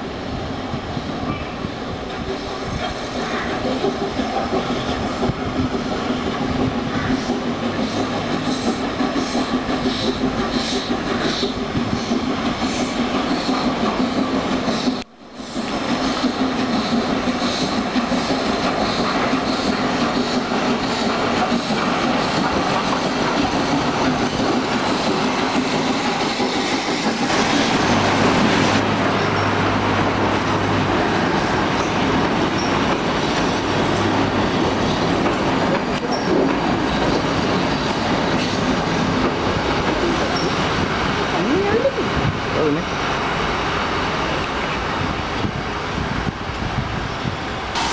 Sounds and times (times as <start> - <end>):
Railroad car, train wagon: 0.0 - 47.9
Train: 0.0 - 47.9
Clickety-clack: 2.8 - 28.6, 31.8 - 40.8.